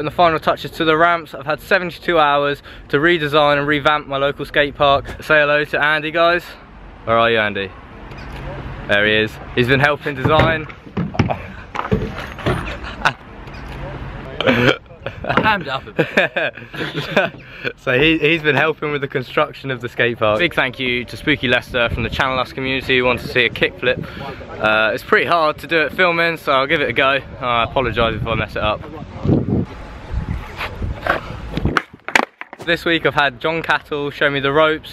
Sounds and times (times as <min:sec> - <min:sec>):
Speech: 0:00.0 - 0:07.7, 0:08.9 - 0:10.7, 0:17.8 - 0:29.3, 0:32.6 - 0:34.9.